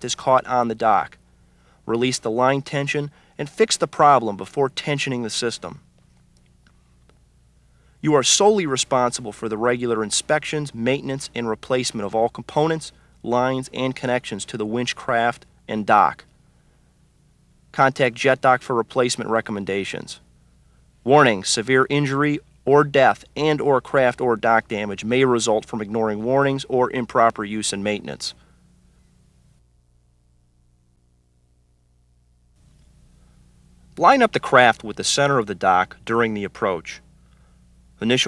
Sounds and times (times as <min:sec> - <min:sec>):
Speech: 0:00.0 - 0:01.2, 0:01.9 - 0:05.9, 0:08.0 - 0:16.3, 0:17.7 - 0:20.3, 0:21.0 - 0:28.4, 0:34.0 - 0:37.1, 0:38.0 - 0:38.2.